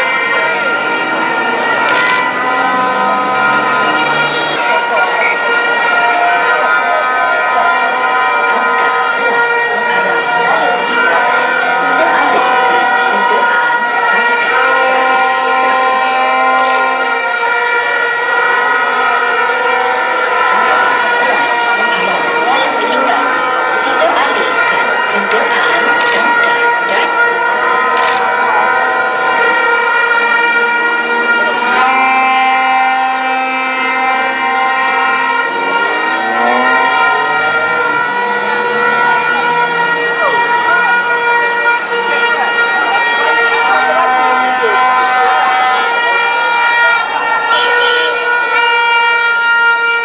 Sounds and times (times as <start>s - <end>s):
Outside, urban or manmade: 0.0s - 50.0s
Speech: 4.2s - 15.8s, 20.5s - 27.3s, 38.8s - 47.3s.